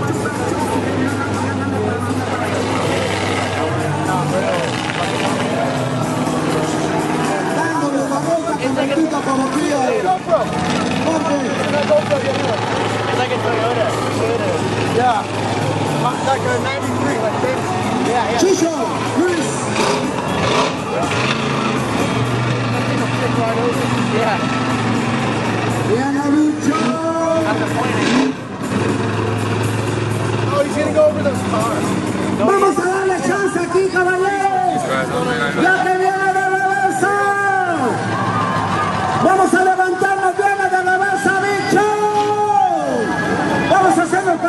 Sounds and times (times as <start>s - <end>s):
Vehicle: 0.0s - 44.4s.